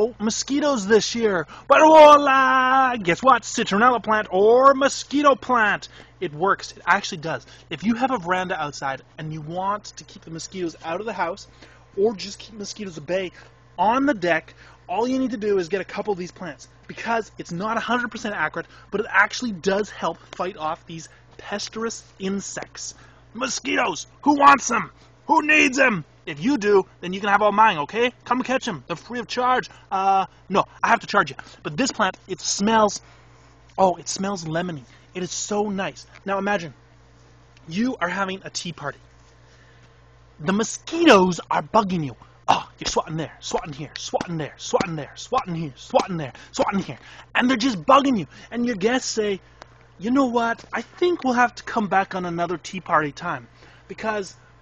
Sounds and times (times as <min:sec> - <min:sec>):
Speech: 0:00.0 - 0:33.0, 0:33.8 - 0:36.8, 0:37.6 - 0:39.0, 0:40.4 - 0:49.4, 0:50.0 - 0:54.4.